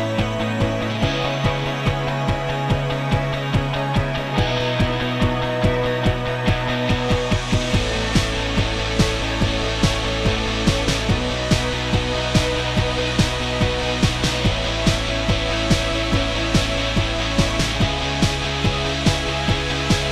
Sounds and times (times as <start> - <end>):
Music: 0.0 - 20.1.